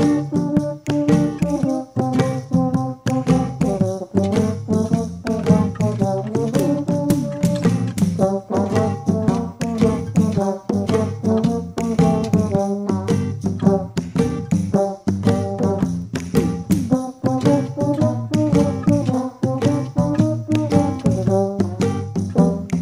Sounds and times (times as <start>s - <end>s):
French horn: 0.0s - 14.0s, 14.7s - 16.0s, 16.9s - 22.8s.